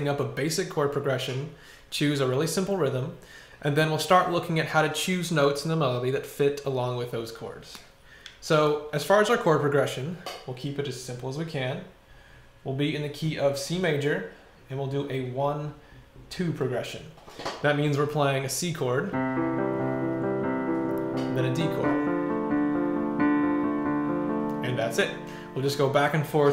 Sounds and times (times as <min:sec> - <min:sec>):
Speech: 0:00.0 - 0:12.0, 0:12.7 - 0:19.2, 0:21.4 - 0:22.0, 0:24.6 - 0:26.5
Music: 0:19.1 - 0:26.5.